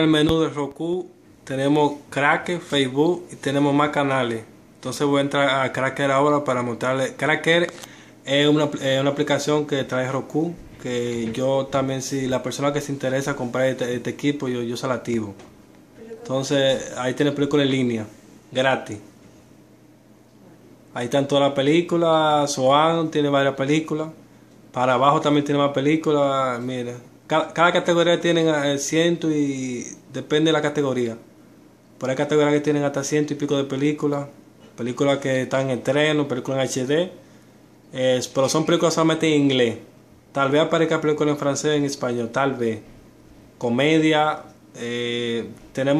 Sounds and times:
Speech: 0.0s - 19.1s, 20.9s - 31.3s, 32.0s - 37.2s, 37.9s - 43.0s, 43.6s - 45.9s.

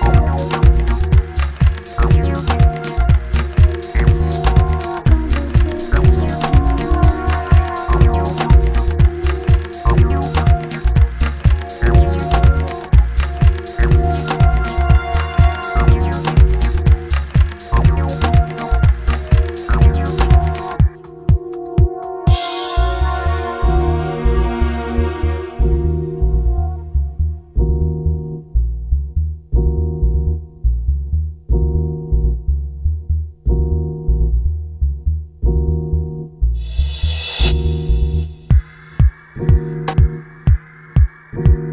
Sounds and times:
Electronic dance music: 0.0s - 27.2s, 36.6s - 41.7s.

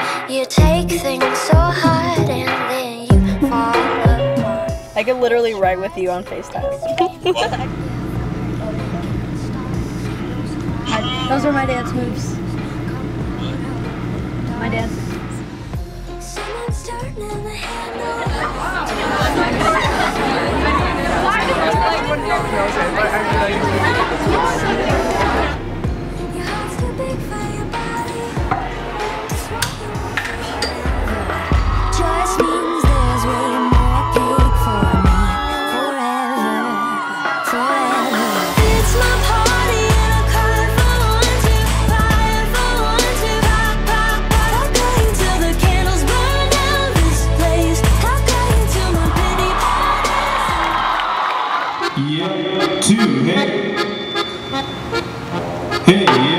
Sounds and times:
Music: 0.0s - 56.3s.

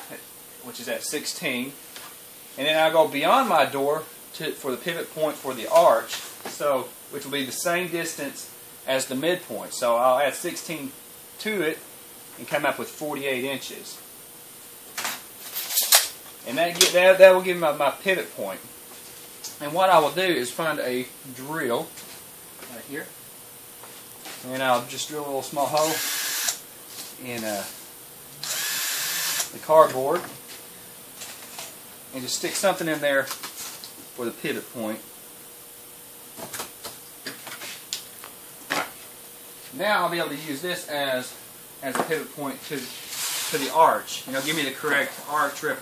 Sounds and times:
Speech: 0.0s - 1.8s, 2.6s - 11.8s, 12.4s - 14.0s, 16.4s - 18.7s, 19.6s - 21.9s, 22.6s - 23.2s, 24.4s - 26.0s, 27.2s - 27.8s, 29.5s - 30.4s, 32.1s - 33.4s, 34.2s - 35.1s, 39.7s - 45.8s.

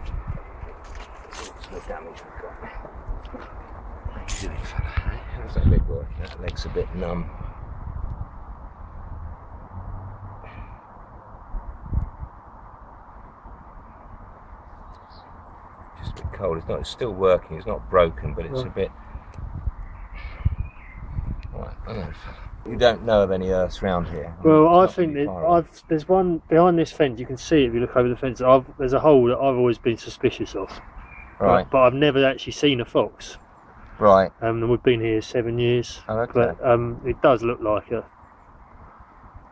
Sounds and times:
Speech: 1.6s - 2.8s, 4.2s - 7.3s, 16.0s - 18.9s, 21.5s - 30.8s, 31.4s - 33.4s, 34.0s - 38.1s.

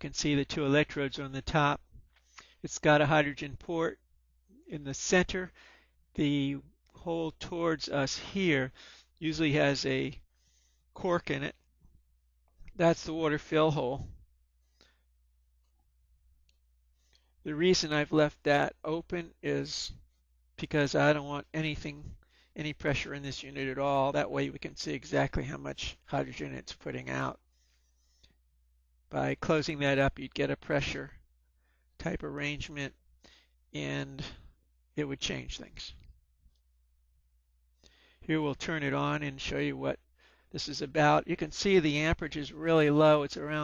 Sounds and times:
Speech: 0.0s - 1.9s, 2.6s - 4.0s, 4.7s - 5.6s, 6.2s - 10.2s, 11.0s - 11.6s, 12.8s - 14.2s, 17.5s - 20.0s, 20.6s - 27.4s, 29.1s - 31.2s, 32.0s - 33.0s, 33.8s - 36.1s, 38.3s - 43.6s.

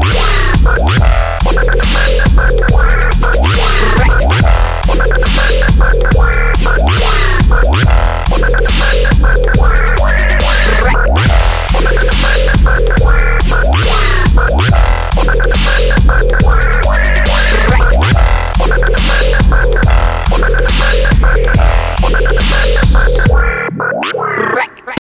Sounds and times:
Dubstep: 0.0s - 25.0s.

